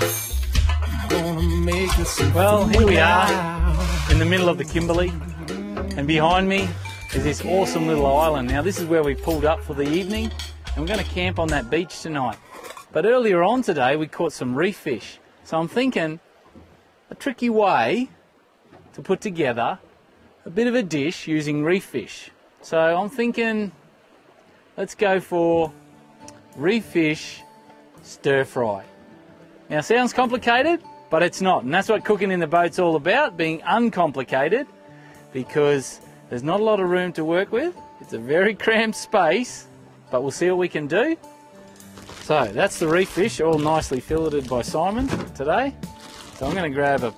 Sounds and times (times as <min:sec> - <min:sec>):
Speech: 0:01.1 - 0:12.4, 0:13.0 - 0:16.2, 0:17.1 - 0:18.1, 0:19.0 - 0:19.8, 0:20.4 - 0:23.8, 0:24.8 - 0:25.7, 0:26.6 - 0:27.4, 0:28.0 - 0:28.9, 0:29.7 - 0:34.7, 0:35.4 - 0:41.2, 0:42.2 - 0:45.8, 0:46.4 - 0:47.1.